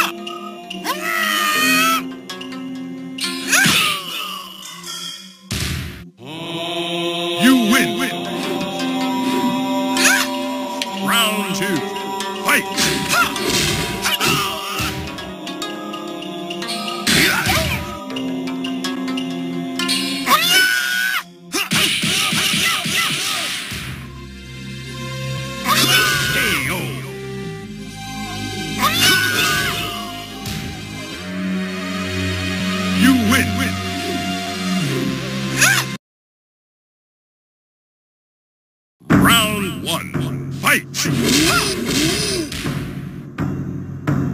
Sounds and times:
Music: 0.0s - 36.0s, 39.1s - 44.3s
Speech: 7.4s - 8.2s, 11.0s - 11.9s, 12.5s - 12.7s, 25.7s - 27.0s, 33.0s - 33.8s, 39.1s - 41.7s.

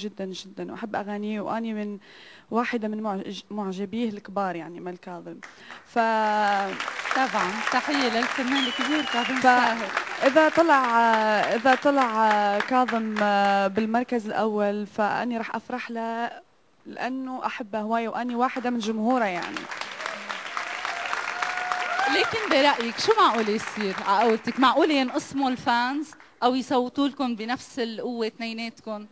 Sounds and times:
Speech: 0.0s - 19.6s, 22.1s - 29.1s.

